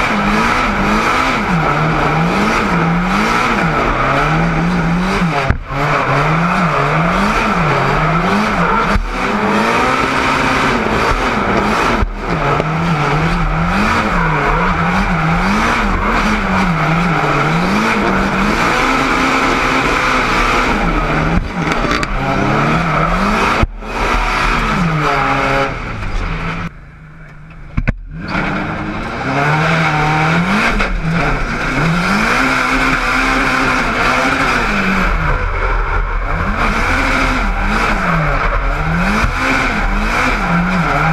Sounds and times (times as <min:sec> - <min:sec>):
Outside, urban or manmade: 0:00.0 - 0:41.1
Race car, auto racing: 0:00.0 - 0:41.1.